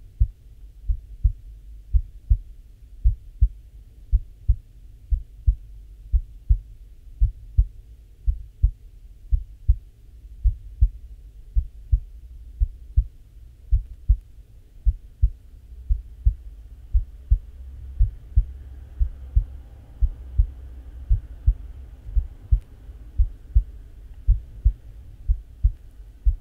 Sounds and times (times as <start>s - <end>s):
Hum: 0.0s - 26.4s
Heart sounds, heartbeat: 0.1s - 26.4s.